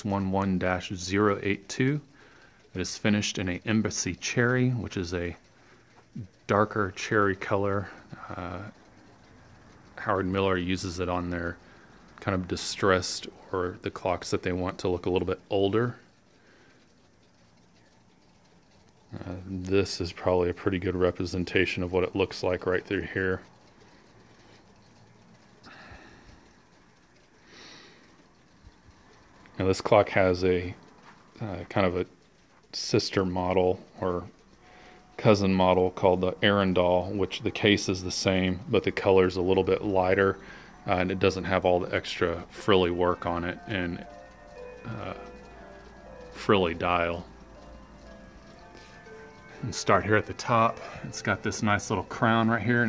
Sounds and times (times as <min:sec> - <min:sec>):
Speech: 0:00.0 - 0:02.1, 0:02.7 - 0:05.5, 0:06.2 - 0:08.8, 0:10.0 - 0:11.6, 0:12.2 - 0:16.1, 0:19.1 - 0:23.5, 0:29.6 - 0:30.8, 0:31.4 - 0:34.4, 0:35.2 - 0:44.1, 0:44.8 - 0:45.3, 0:46.3 - 0:47.3, 0:49.6 - 0:52.8.